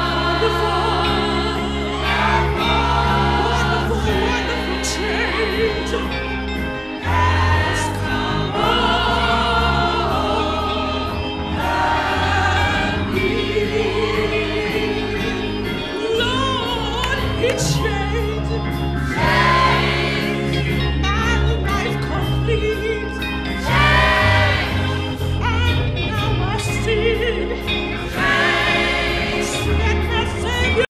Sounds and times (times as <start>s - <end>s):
Music: 0.0s - 30.9s.